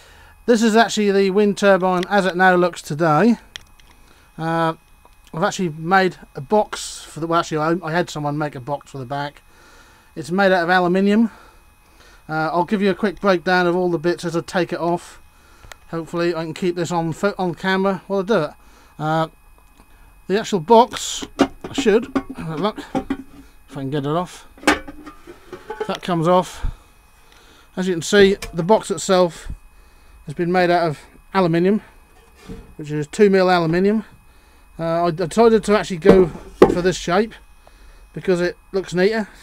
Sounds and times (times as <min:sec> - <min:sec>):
Speech: 0:00.5 - 0:03.4, 0:04.4 - 0:09.4, 0:10.2 - 0:11.4, 0:12.3 - 0:15.2, 0:15.9 - 0:19.3, 0:20.3 - 0:22.9, 0:23.7 - 0:24.5, 0:25.9 - 0:26.6, 0:27.8 - 0:29.6, 0:30.3 - 0:31.9, 0:32.8 - 0:34.1, 0:34.8 - 0:37.4, 0:38.2 - 0:39.3.